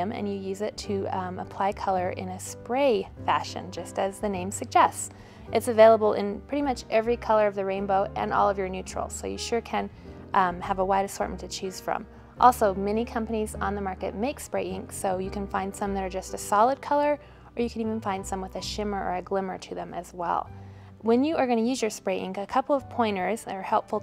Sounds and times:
Music: 0.0s - 24.0s
Speech: 0.0s - 24.0s.

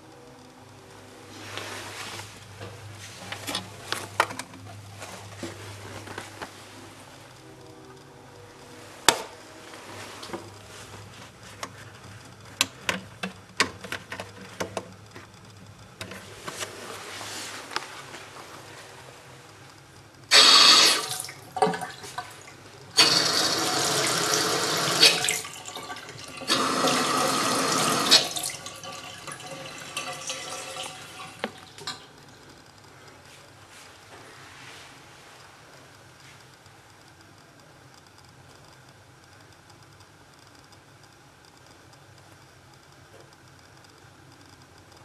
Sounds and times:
Water tap, faucet: 20.3s - 22.2s, 23.0s - 31.4s
Sink (filling or washing): 20.3s - 22.4s, 23.0s - 32.0s.

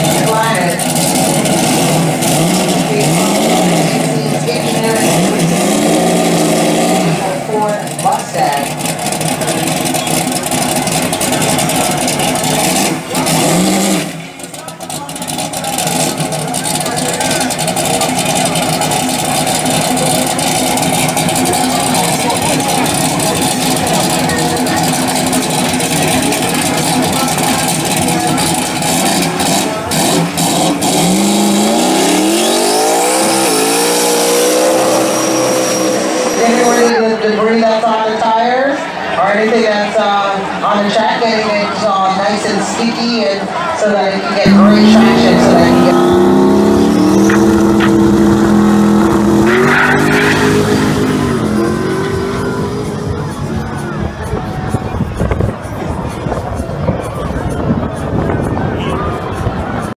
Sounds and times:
Speech: 0.0s - 0.9s, 2.8s - 5.6s, 7.2s - 8.7s, 14.4s - 30.0s, 36.4s - 46.3s, 52.9s - 59.9s
Race car, auto racing: 0.0s - 59.9s.

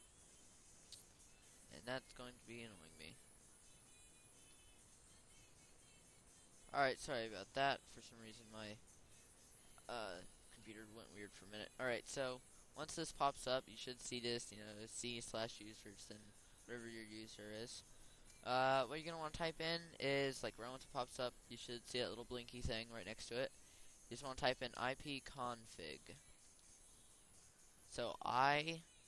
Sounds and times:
Speech: 1.7s - 3.2s, 6.7s - 8.8s, 9.8s - 17.8s, 18.4s - 23.5s, 24.1s - 26.2s, 27.9s - 28.8s.

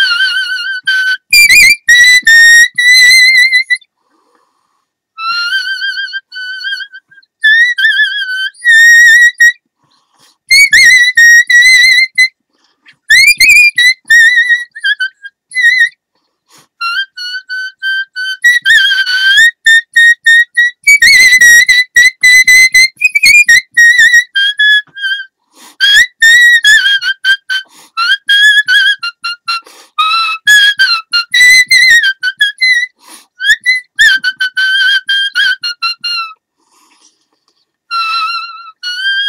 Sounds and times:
Whistle: 0.0s - 3.9s, 5.2s - 9.6s, 10.2s - 36.4s, 37.9s - 39.2s.

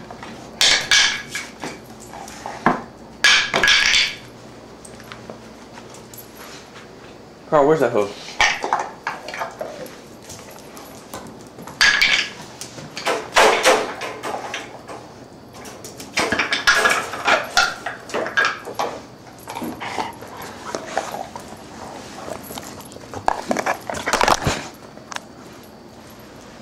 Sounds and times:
Speech: 7.5s - 8.2s.

